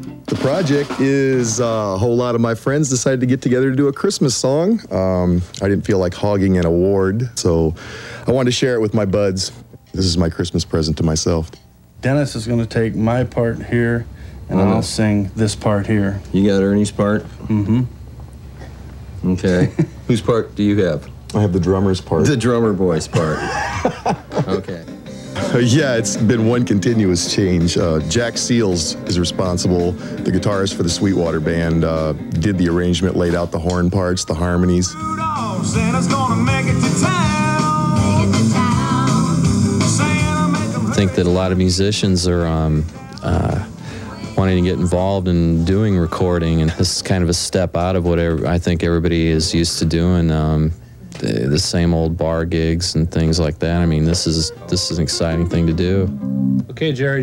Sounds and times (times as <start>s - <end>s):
Speech: 0.3s - 17.9s, 19.2s - 23.5s, 24.4s - 24.9s, 25.5s - 34.9s, 40.9s - 43.7s, 44.4s - 56.1s, 56.7s - 57.2s.